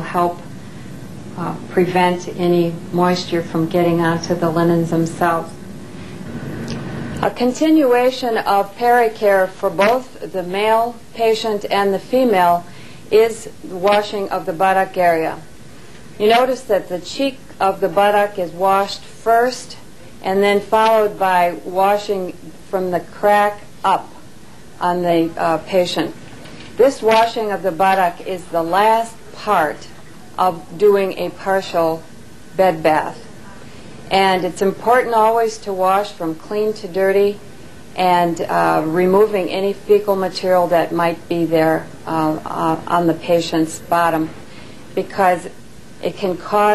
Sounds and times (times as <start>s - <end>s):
Speech: 0.0s - 0.4s, 1.4s - 5.6s, 7.2s - 15.4s, 16.2s - 24.2s, 24.8s - 26.2s, 26.8s - 33.3s, 34.1s - 37.4s, 38.0s - 44.4s, 45.0s - 46.7s.